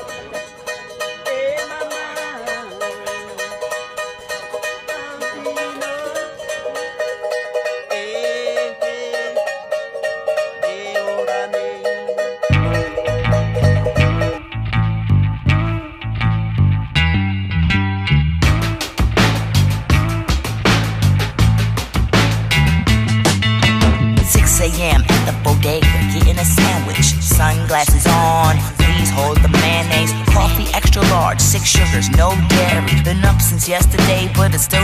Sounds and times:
Mandolin: 0:00.0 - 0:34.8.

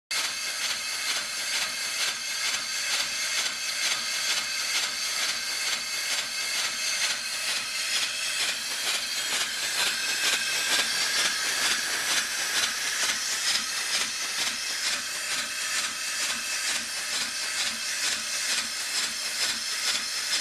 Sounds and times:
Engine: 0:00.1 - 0:20.4.

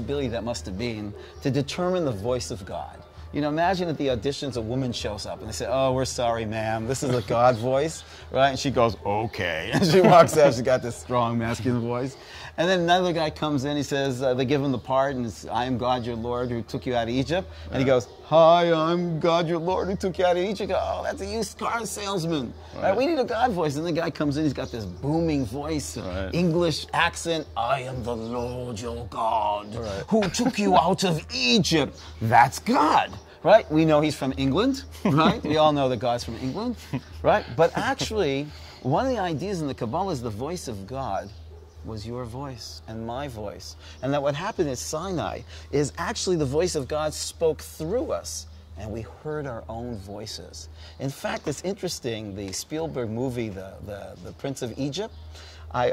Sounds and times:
Speech: 0:00.0 - 0:55.9.

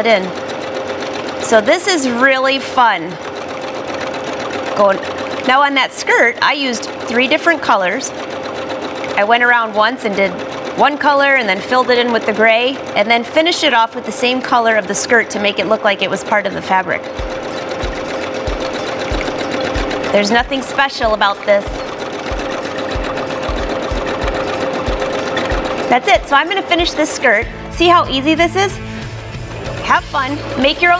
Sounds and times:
Sewing machine: 0:00.0 - 0:28.0, 0:29.0 - 0:31.0.

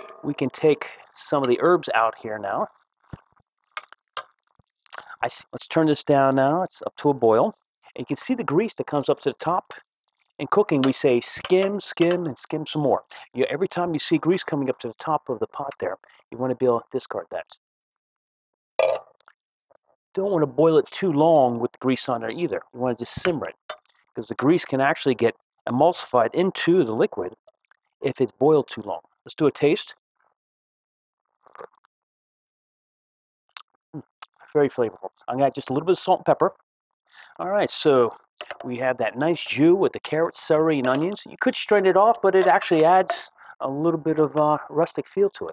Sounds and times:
Speech: 0:00.2 - 0:02.7, 0:05.0 - 0:09.8, 0:10.4 - 0:17.6, 0:20.2 - 0:23.6, 0:24.2 - 0:27.4, 0:28.0 - 0:30.0, 0:34.0 - 0:36.6, 0:37.3 - 0:45.5.

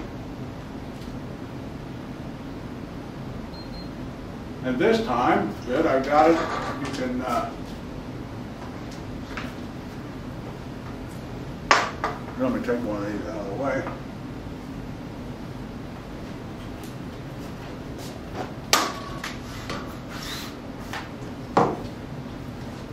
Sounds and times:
Speech: 0:04.6 - 0:07.6, 0:12.4 - 0:14.0.

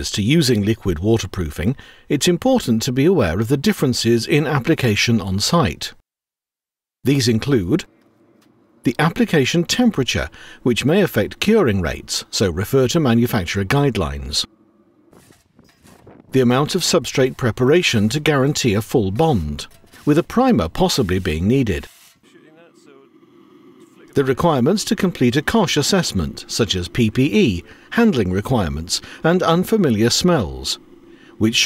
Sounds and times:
Speech: 0:00.0 - 0:06.0, 0:07.0 - 0:07.9, 0:08.9 - 0:14.5, 0:16.3 - 0:23.2, 0:23.8 - 0:30.8, 0:31.4 - 0:31.6.

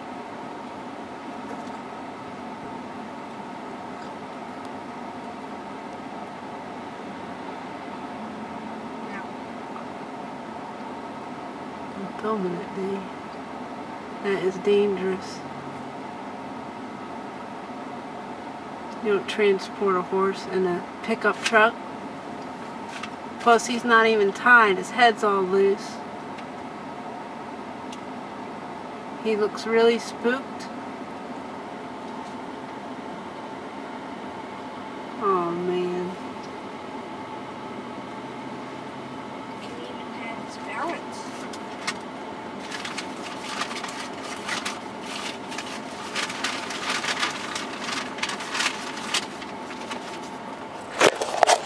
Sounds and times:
Speech: 0:12.0 - 0:13.1, 0:14.2 - 0:15.5, 0:19.0 - 0:21.8, 0:23.4 - 0:26.0, 0:29.2 - 0:30.7, 0:35.2 - 0:36.2, 0:39.6 - 0:41.4.

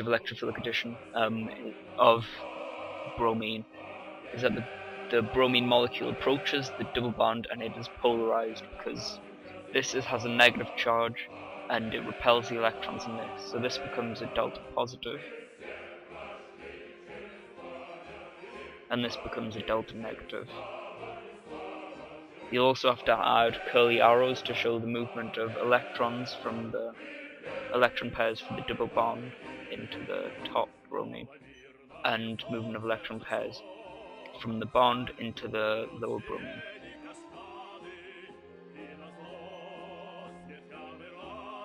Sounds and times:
Speech: 0:00.0 - 0:02.4, 0:03.2 - 0:03.7, 0:04.4 - 0:09.2, 0:09.8 - 0:15.2, 0:18.9 - 0:20.6, 0:22.6 - 0:27.0, 0:27.8 - 0:31.3, 0:32.1 - 0:33.6, 0:34.4 - 0:36.6.

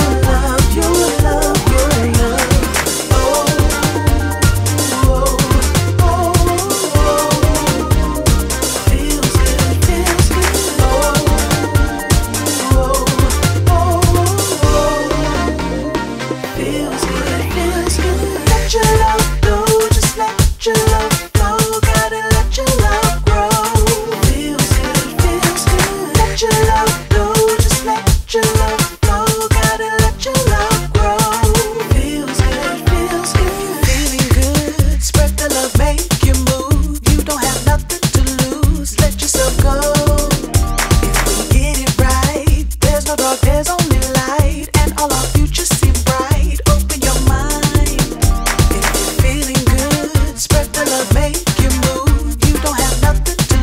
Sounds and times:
Music: 0:00.0 - 0:53.6.

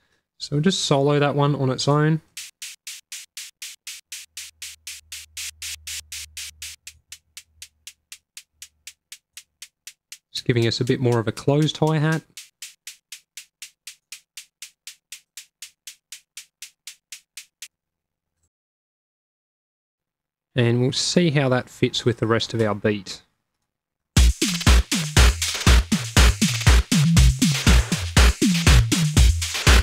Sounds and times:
Speech: 0:00.4 - 0:02.3, 0:10.4 - 0:12.3, 0:20.6 - 0:23.3
Drum machine: 0:02.2 - 0:17.7, 0:24.2 - 0:29.8.

